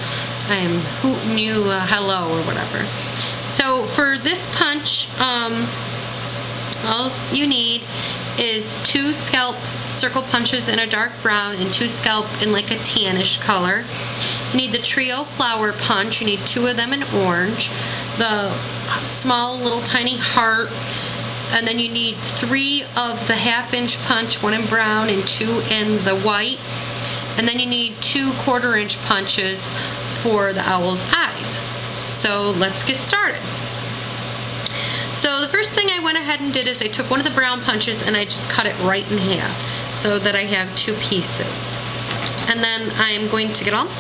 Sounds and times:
Speech: 0.5 - 5.8, 6.8 - 13.9, 14.5 - 20.8, 21.5 - 26.6, 27.4 - 33.5, 35.2 - 41.8, 42.5 - 44.0.

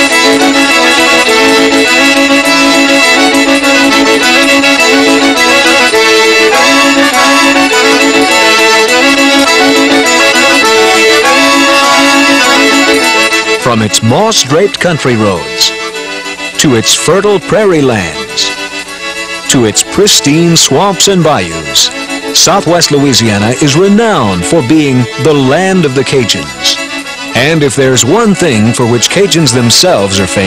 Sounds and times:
Music: 0.0 - 30.4
Speech: 13.6 - 15.8, 16.6 - 18.6, 19.5 - 26.8, 27.4 - 30.4.

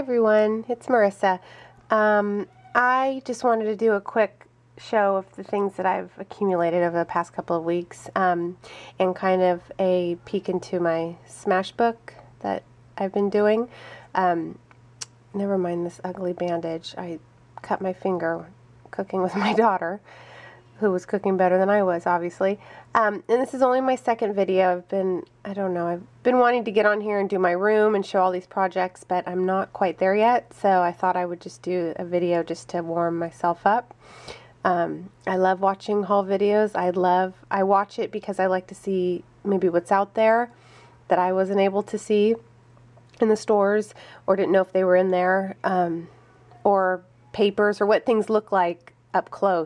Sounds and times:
Speech: 0.0 - 14.6, 15.3 - 20.0, 20.8 - 33.9, 34.6 - 42.5, 43.2 - 49.6.

